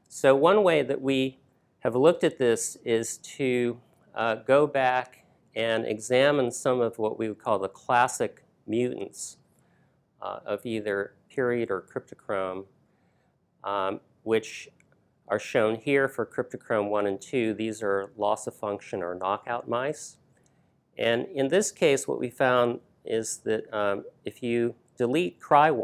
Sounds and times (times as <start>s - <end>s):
Speech: 0.0s - 9.4s, 10.2s - 12.7s, 13.6s - 14.7s, 15.3s - 20.2s, 21.0s - 25.8s.